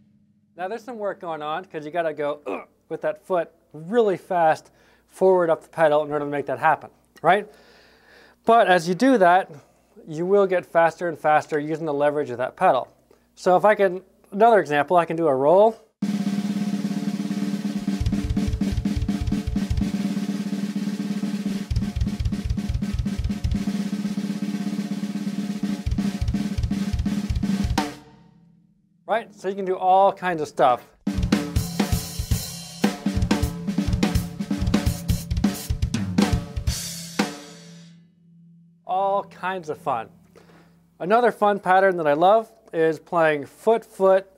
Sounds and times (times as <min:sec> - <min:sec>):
Speech: 0:00.6 - 0:07.5, 0:08.5 - 0:15.9, 0:29.1 - 0:30.9, 0:38.9 - 0:40.1, 0:41.0 - 0:44.3
Snare drum: 0:16.0 - 0:28.1, 0:31.1 - 0:37.9
Drum kit: 0:16.0 - 0:28.2, 0:31.0 - 0:38.1, 0:38.9 - 0:40.8.